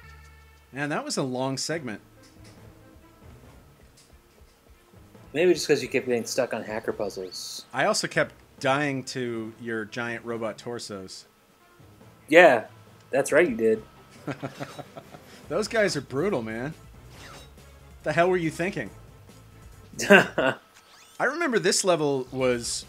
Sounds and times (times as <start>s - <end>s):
Music: 0.0s - 20.6s, 22.0s - 22.8s
Speech: 0.8s - 2.0s, 5.4s - 11.3s, 12.3s - 13.8s, 15.5s - 16.8s, 18.1s - 18.9s, 21.2s - 22.8s.